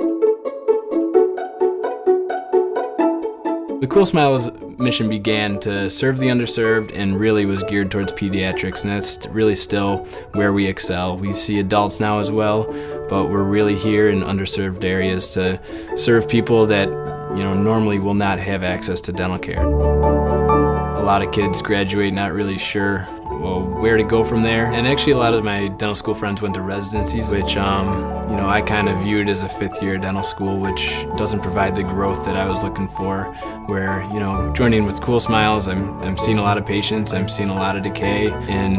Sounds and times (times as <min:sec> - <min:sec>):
Music: 0:00.0 - 0:38.7
Speech: 0:03.8 - 0:19.6, 0:21.0 - 0:38.7.